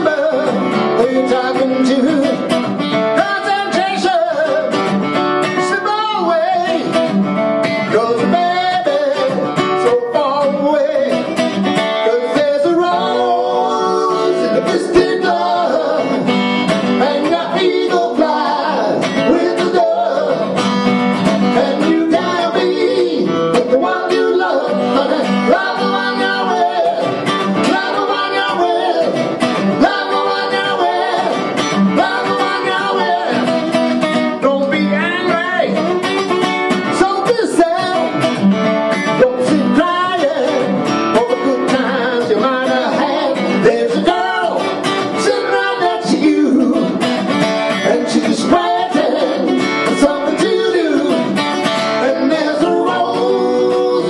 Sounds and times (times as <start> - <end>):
Male singing: 0.0 - 2.5, 3.2 - 4.8, 5.6 - 7.0, 7.9 - 11.3, 12.0 - 16.3, 17.0 - 20.6, 21.6 - 29.2, 34.4 - 36.0, 37.0 - 38.1, 39.2 - 44.6, 45.2 - 47.0, 47.8 - 51.4, 52.0 - 54.1
Acoustic guitar: 0.0 - 54.1.